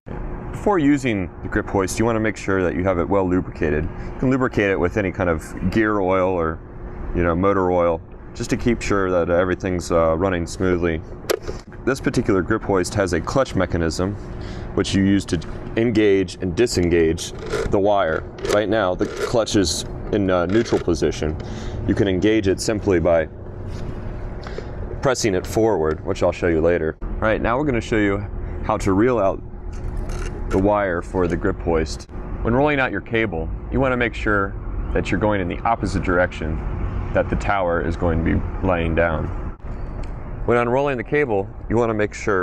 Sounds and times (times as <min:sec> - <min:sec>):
Speech: 0:00.6 - 0:06.6, 0:07.2 - 0:11.0, 0:11.8 - 0:14.2, 0:14.8 - 0:23.3, 0:25.0 - 0:29.4, 0:30.5 - 0:39.3, 0:40.4 - 0:42.4.